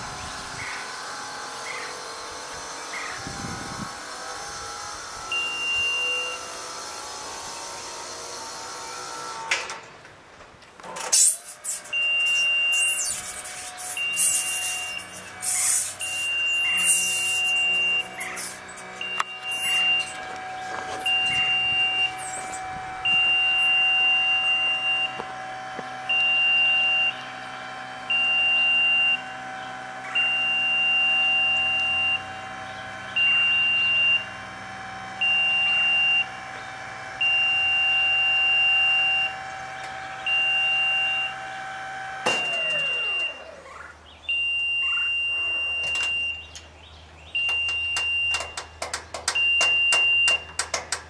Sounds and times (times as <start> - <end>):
Vehicle: 0.0 - 51.0.